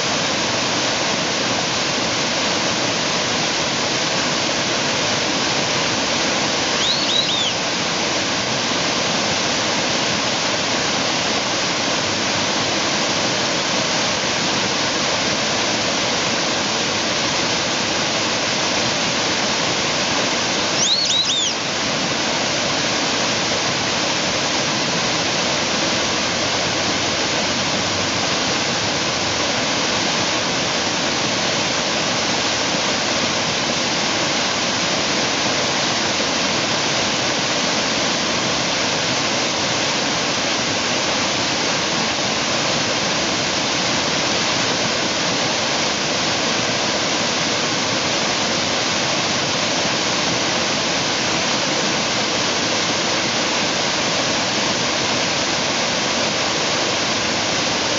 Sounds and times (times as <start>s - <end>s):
Whistling: 6.8s - 7.6s, 20.8s - 21.6s.